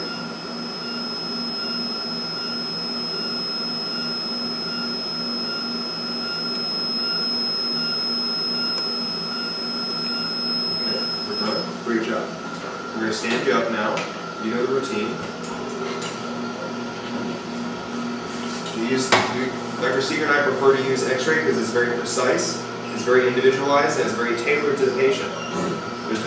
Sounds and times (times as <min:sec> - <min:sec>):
Speech: 0:10.9 - 0:12.4, 0:13.0 - 0:15.2, 0:18.7 - 0:25.4.